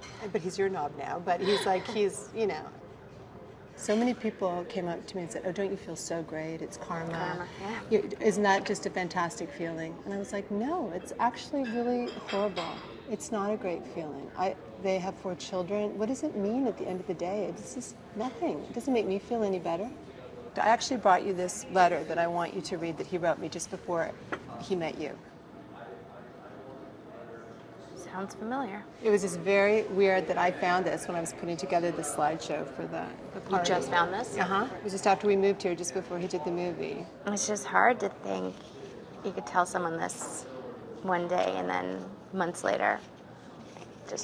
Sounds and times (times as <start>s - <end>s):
Female speech, woman speaking: 0.1s - 2.8s, 3.8s - 20.0s, 20.6s - 25.2s, 28.0s - 38.6s, 39.2s - 43.0s.